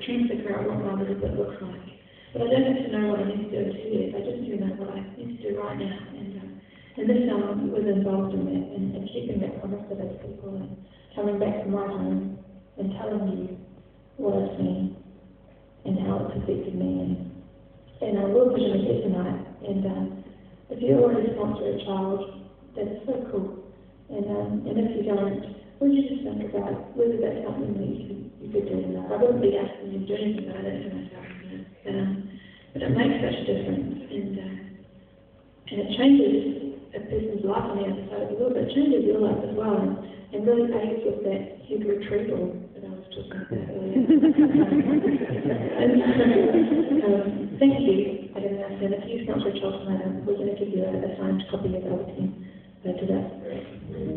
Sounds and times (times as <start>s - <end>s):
Female speech, woman speaking: 0.0s - 13.6s, 14.2s - 15.0s, 15.8s - 17.2s, 18.0s - 34.7s, 35.7s - 54.1s
Narration, monologue: 0.0s - 54.1s.